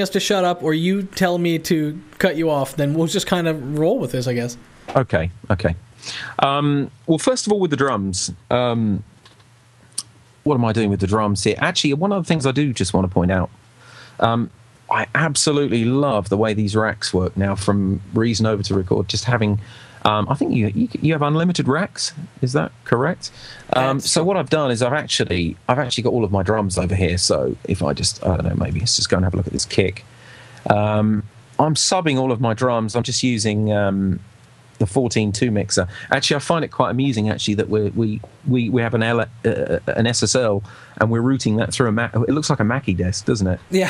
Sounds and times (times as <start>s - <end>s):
Speech: 0.0s - 9.1s, 10.0s - 13.6s, 14.2s - 43.9s.